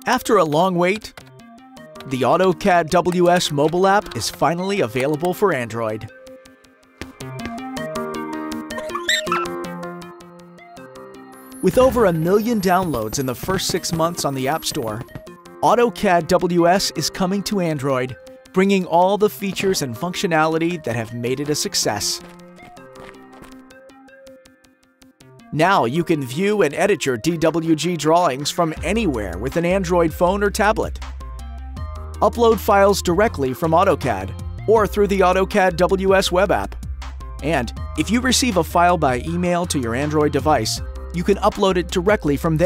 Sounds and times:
Speech: 0:00.0 - 0:01.1, 0:02.1 - 0:06.1, 0:11.6 - 0:15.0, 0:15.6 - 0:22.2, 0:25.6 - 0:31.0, 0:32.2 - 0:36.7, 0:37.4 - 0:42.6
Music: 0:00.0 - 0:42.6.

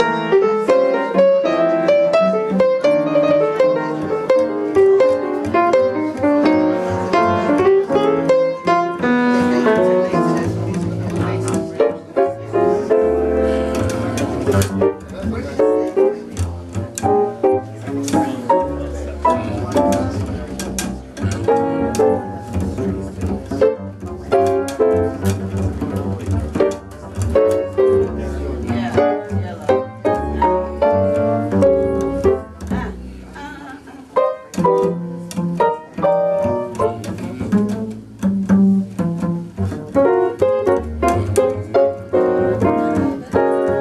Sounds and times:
Music: 0:00.0 - 0:43.8
Speech: 0:09.0 - 0:13.2, 0:15.0 - 0:23.8, 0:25.7 - 0:34.2.

